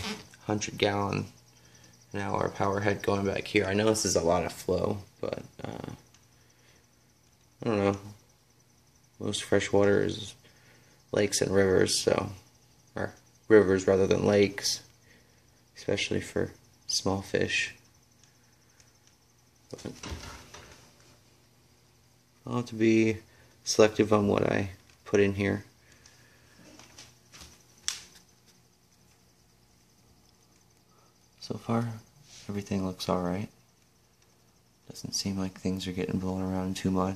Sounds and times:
Speech: 0:00.0 - 0:01.4, 0:02.1 - 0:06.0, 0:07.6 - 0:08.2, 0:09.2 - 0:10.4, 0:11.1 - 0:12.4, 0:13.0 - 0:14.9, 0:15.8 - 0:17.8, 0:22.4 - 0:25.7, 0:31.4 - 0:33.6, 0:34.9 - 0:37.1
Inside, small room: 0:00.0 - 0:37.1.

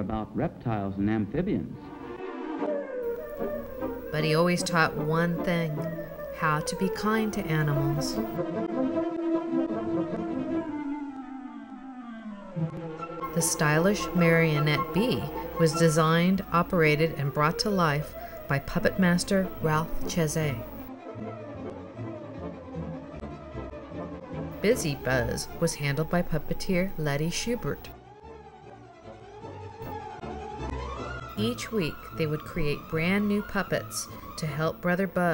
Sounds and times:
Speech: 0:00.0 - 0:01.8, 0:04.1 - 0:08.4, 0:13.3 - 0:20.8, 0:24.6 - 0:27.9, 0:31.4 - 0:35.3
Music: 0:00.0 - 0:35.3.

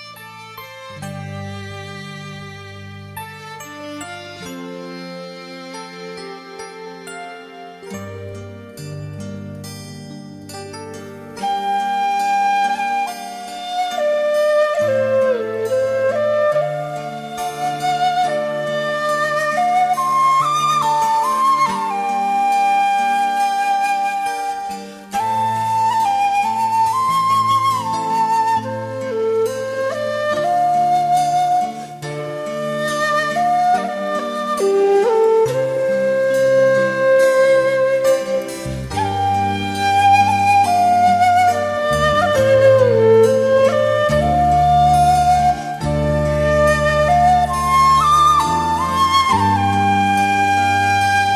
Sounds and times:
Tender music: 0:00.0 - 0:51.3.

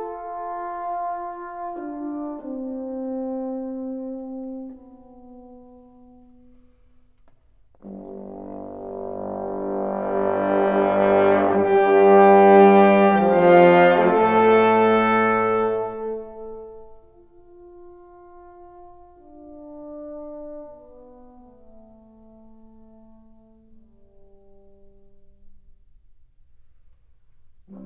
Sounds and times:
Brass instrument: 0:00.0 - 0:25.8, 0:27.5 - 0:27.8.

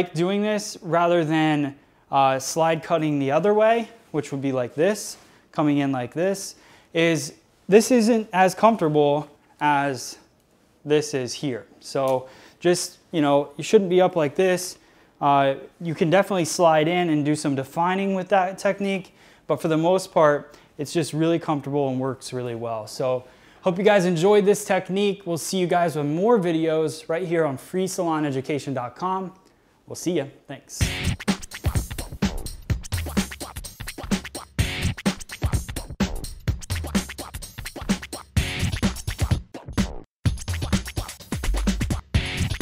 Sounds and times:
Scratching (performance technique): 0:30.8 - 0:42.6.

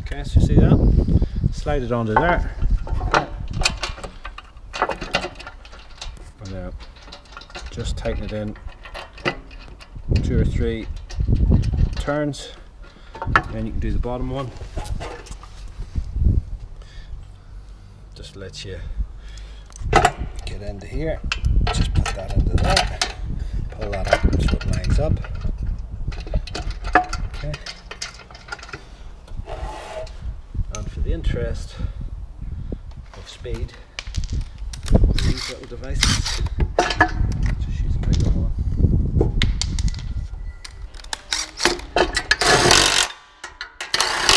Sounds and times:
Speech: 0:00.0 - 0:00.8, 0:01.6 - 0:02.5, 0:06.4 - 0:06.8, 0:07.7 - 0:08.6, 0:10.2 - 0:10.9, 0:12.0 - 0:12.6, 0:13.5 - 0:14.6, 0:18.2 - 0:18.9, 0:20.5 - 0:21.2, 0:21.8 - 0:23.1, 0:23.8 - 0:25.2, 0:27.4 - 0:27.7, 0:30.7 - 0:31.9, 0:33.2 - 0:33.8, 0:35.2 - 0:36.2, 0:37.6 - 0:38.6.

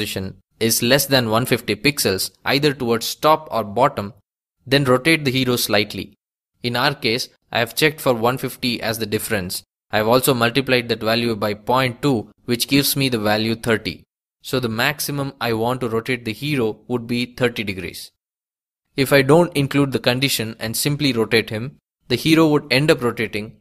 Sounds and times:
Speech: 0:00.0 - 0:18.2, 0:19.0 - 0:23.6.

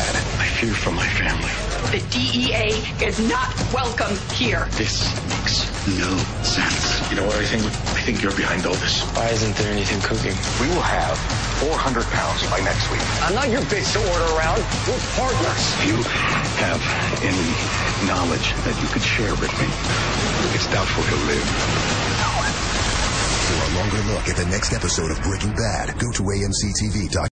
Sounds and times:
Music: 0:00.0 - 0:27.3
Speech: 0:05.9 - 0:13.9, 0:23.5 - 0:27.3.

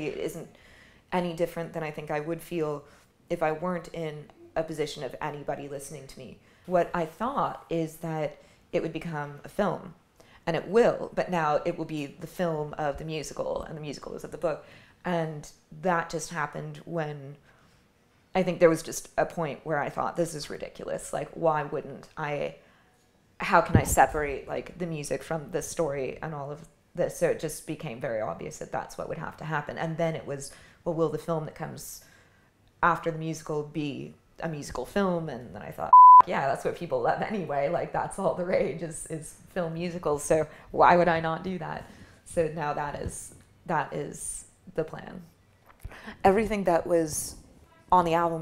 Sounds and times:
Speech: 0:00.0 - 0:00.5, 0:01.1 - 0:17.4, 0:18.4 - 0:22.6, 0:23.4 - 0:32.1, 0:32.8 - 0:45.3, 0:46.1 - 0:48.4.

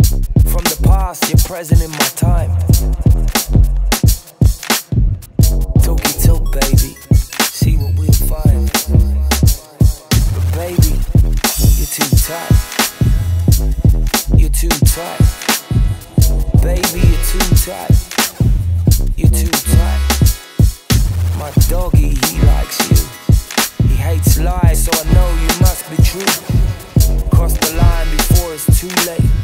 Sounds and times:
Music: 0:00.0 - 0:29.4
Rapping: 0:00.4 - 0:04.9, 0:05.6 - 0:20.4, 0:21.3 - 0:29.4.

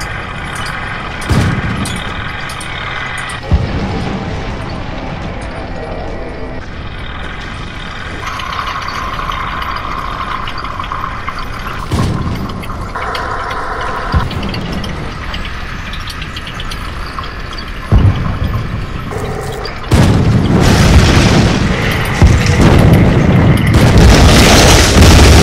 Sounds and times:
Outside, rural or natural: 0:00.0 - 0:25.4
Vehicle: 0:00.0 - 0:25.4.

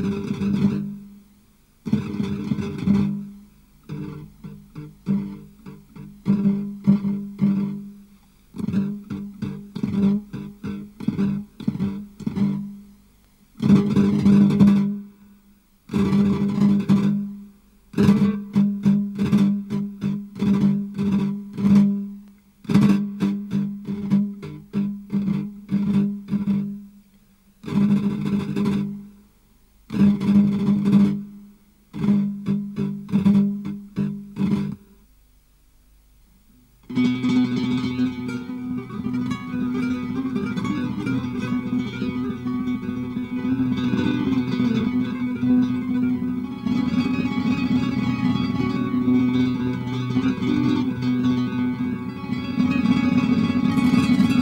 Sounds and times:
Guitar: 0:00.0 - 0:29.3, 0:29.9 - 0:35.1, 0:36.6 - 0:54.4
Flamenco: 0:00.0 - 0:35.2, 0:36.5 - 0:54.4.

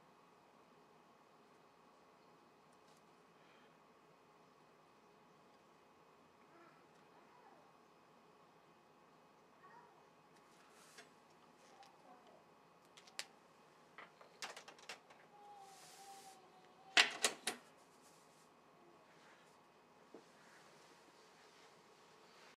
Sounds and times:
Inside, small room: 0:00.0 - 0:22.5.

